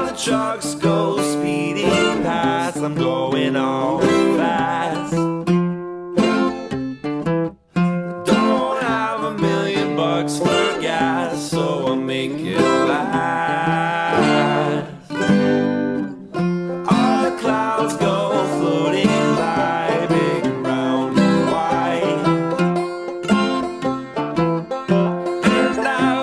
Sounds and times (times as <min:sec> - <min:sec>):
Singing: 0:00.0 - 0:05.2, 0:08.3 - 0:15.1, 0:16.9 - 0:22.3, 0:25.4 - 0:26.2.